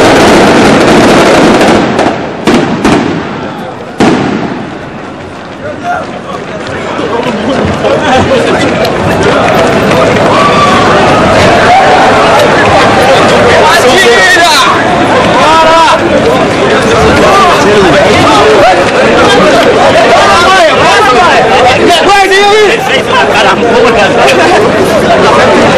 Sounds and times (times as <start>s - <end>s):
Speech: 5.6s - 10.4s, 11.7s - 25.7s.